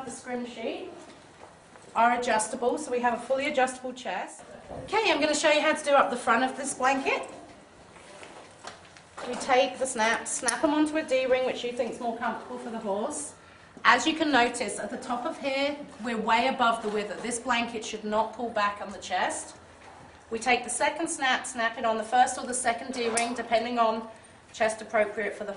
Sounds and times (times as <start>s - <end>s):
Speech: 0.0s - 1.1s, 2.0s - 7.4s, 9.2s - 19.6s, 20.3s - 25.5s.